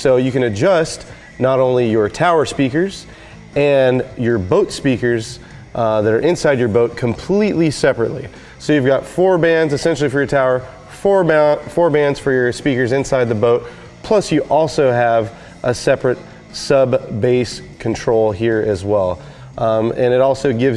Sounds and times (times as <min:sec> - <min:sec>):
Speech: 0:00.0 - 0:20.7.